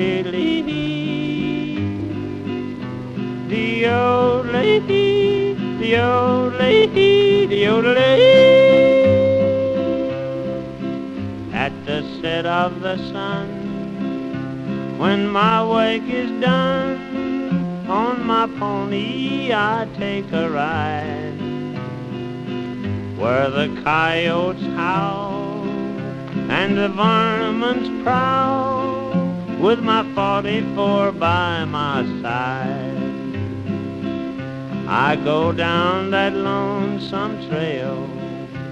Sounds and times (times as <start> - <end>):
Music: 0.0 - 38.7.